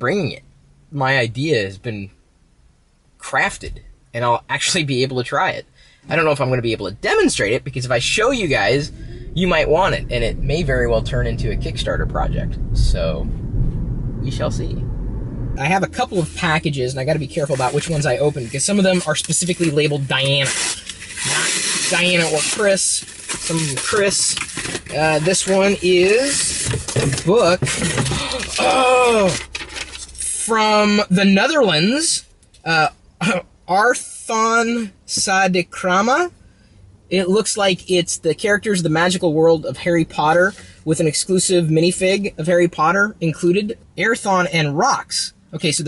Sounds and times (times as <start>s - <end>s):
Speech: 0.0s - 2.2s, 3.2s - 13.3s, 14.2s - 14.8s, 15.6s - 29.5s, 30.2s - 36.3s, 37.1s - 45.8s.